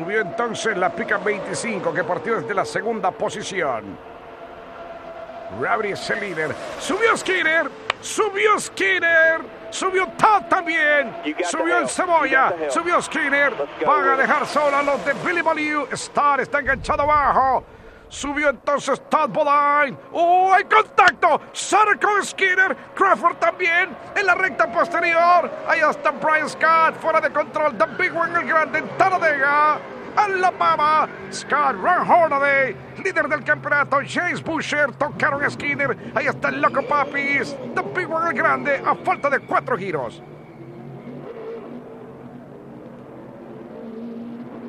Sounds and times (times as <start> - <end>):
Speech: 0.0 - 4.0, 5.5 - 40.2
Vehicle: 0.0 - 44.6.